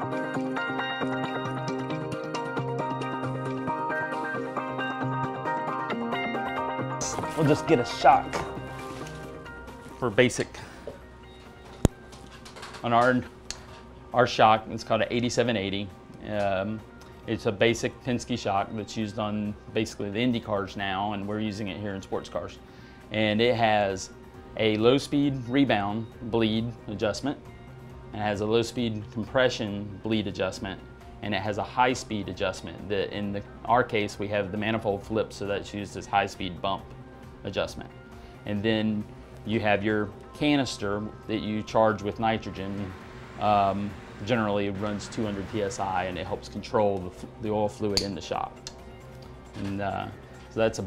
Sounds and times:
Music: 0:00.0 - 0:50.8
Speech: 0:07.0 - 0:08.4, 0:10.0 - 0:10.6, 0:12.8 - 0:13.3, 0:14.2 - 0:27.4, 0:28.2 - 0:36.8, 0:37.4 - 0:37.9, 0:38.5 - 0:48.6, 0:49.6 - 0:50.8.

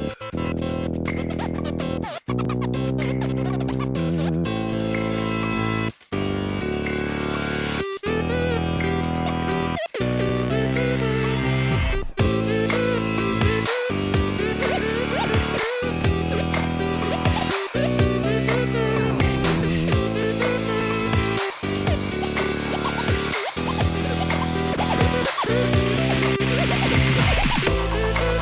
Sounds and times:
Music: 0:00.0 - 0:28.4.

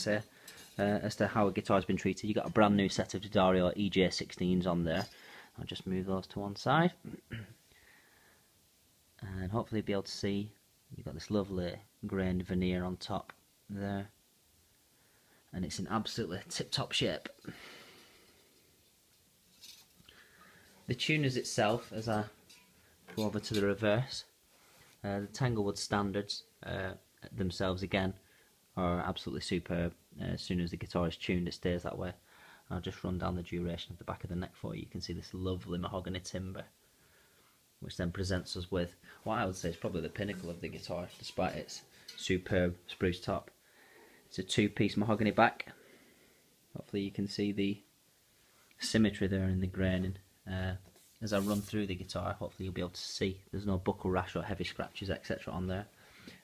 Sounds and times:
Speech: 0:00.0 - 0:07.6, 0:09.2 - 0:14.2, 0:15.5 - 0:17.4, 0:20.9 - 0:22.4, 0:23.1 - 0:24.4, 0:25.0 - 0:28.2, 0:28.8 - 0:36.8, 0:37.8 - 0:43.6, 0:44.3 - 0:45.8, 0:46.7 - 0:47.9, 0:48.8 - 0:55.9.

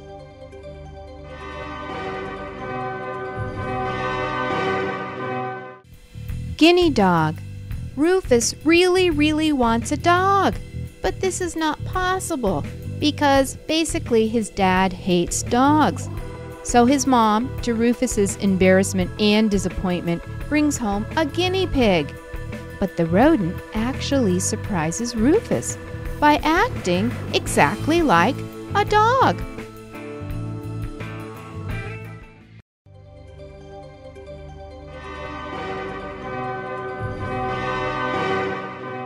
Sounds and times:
Music: 0:00.0 - 0:39.0
Speech: 0:06.6 - 0:07.4, 0:08.0 - 0:16.1, 0:16.7 - 0:22.1, 0:22.8 - 0:29.5.

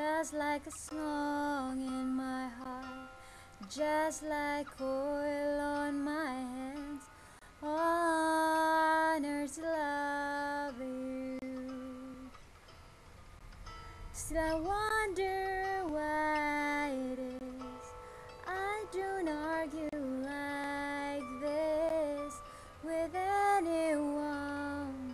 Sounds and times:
Female singing: 0:00.0 - 0:03.0, 0:03.6 - 0:12.4, 0:14.2 - 0:25.1
Music: 0:00.0 - 0:25.1.

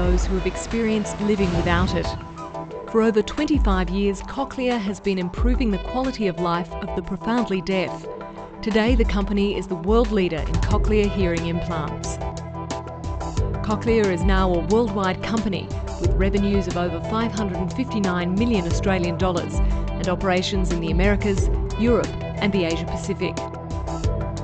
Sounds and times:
Speech: 0:00.0 - 0:02.2, 0:03.0 - 0:08.0, 0:08.6 - 0:12.2, 0:13.7 - 0:23.4
Music: 0:00.0 - 0:24.4.

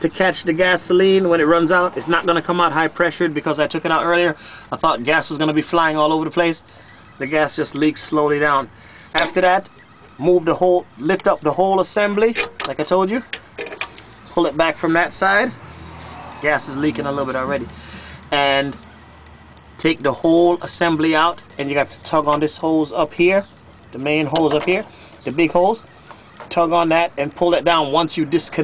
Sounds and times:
Speech: 0:00.0 - 0:06.6, 0:07.2 - 0:13.3, 0:14.4 - 0:15.6, 0:16.4 - 0:17.7, 0:18.3 - 0:18.8, 0:19.8 - 0:25.8, 0:26.5 - 0:28.6.

